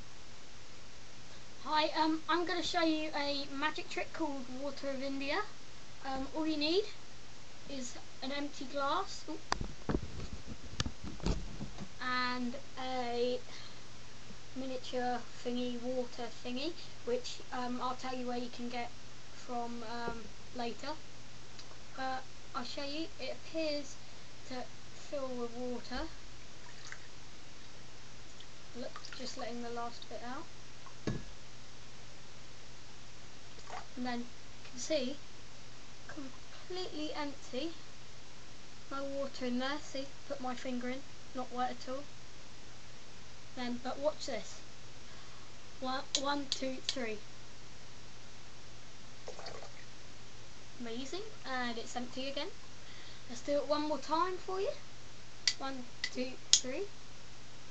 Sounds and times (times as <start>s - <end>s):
Speech: 1.6s - 7.0s, 7.7s - 9.5s, 12.0s - 13.7s, 14.6s - 21.0s, 22.0s - 26.2s, 28.8s - 30.5s, 34.0s - 35.2s, 36.1s - 37.8s, 38.9s - 42.1s, 43.6s - 44.6s, 45.8s - 47.3s, 50.8s - 52.6s, 53.3s - 54.8s, 55.5s - 56.9s.